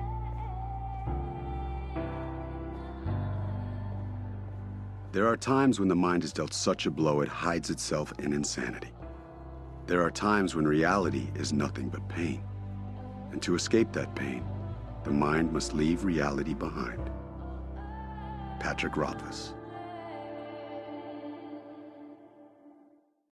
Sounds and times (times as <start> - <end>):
Music: 0.0 - 23.3
Speech: 5.2 - 9.0, 9.9 - 12.4, 13.3 - 14.5, 15.1 - 17.1, 18.6 - 19.6.